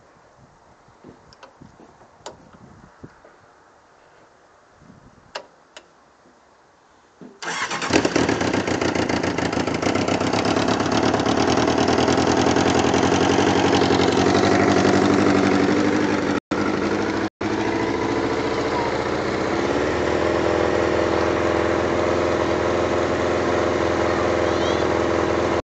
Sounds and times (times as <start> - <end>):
Vehicle: 1.0 - 25.6
Idling: 7.4 - 25.6.